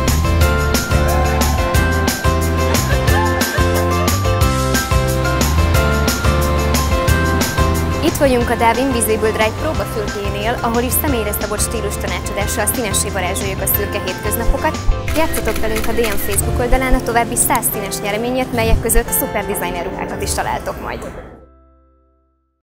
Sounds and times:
Music: 0.0 - 22.6
Speech: 8.0 - 21.4.

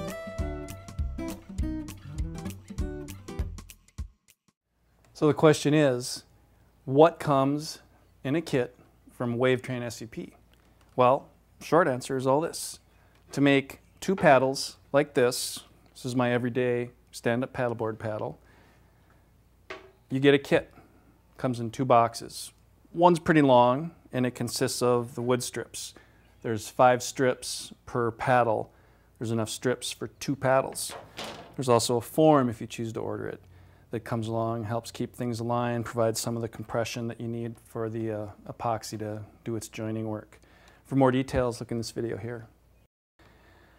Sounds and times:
Speech: 5.2 - 10.4, 11.0 - 18.4, 20.1 - 20.8, 21.4 - 31.0, 31.6 - 42.6.

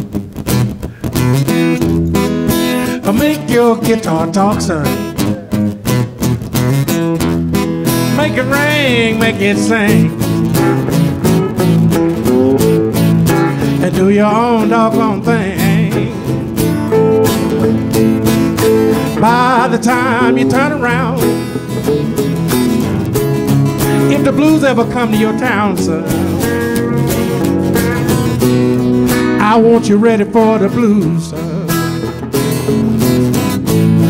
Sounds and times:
Acoustic guitar: 0.0 - 34.1.

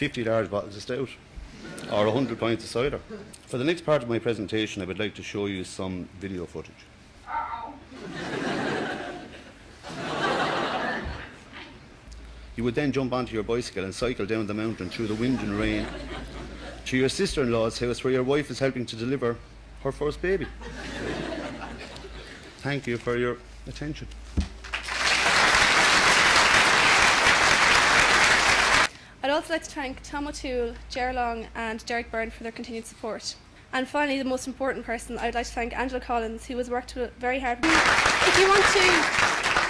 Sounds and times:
Male speech, man speaking: 0.0 - 1.2, 1.9 - 6.8, 12.6 - 16.0, 16.9 - 20.6, 22.6 - 24.1
Narration, monologue: 0.0 - 7.9, 11.8 - 24.7, 28.9 - 39.0
Female speech, woman speaking: 29.2 - 39.1.

